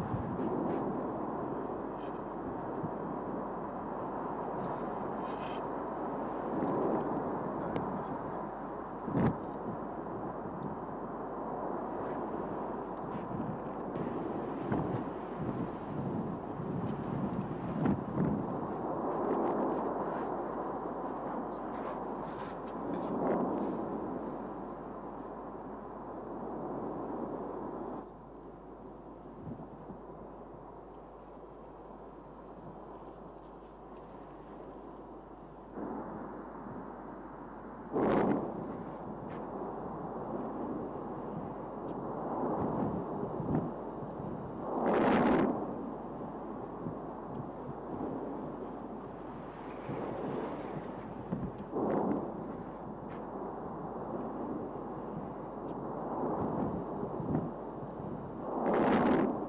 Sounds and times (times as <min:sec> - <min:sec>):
Eruption: 0:00.0 - 0:59.4.